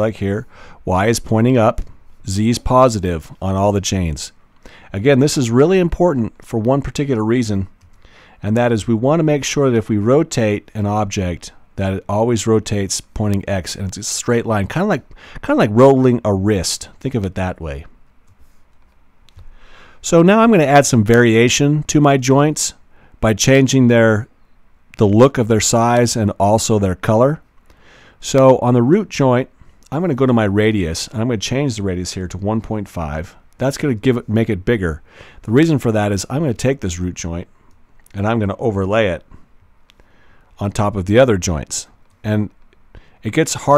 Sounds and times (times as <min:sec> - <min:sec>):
Speech: 0:00.0 - 0:07.8, 0:08.4 - 0:18.0, 0:20.0 - 0:24.3, 0:25.0 - 0:27.5, 0:28.2 - 0:37.5, 0:38.1 - 0:39.4, 0:40.6 - 0:42.6, 0:43.2 - 0:43.7.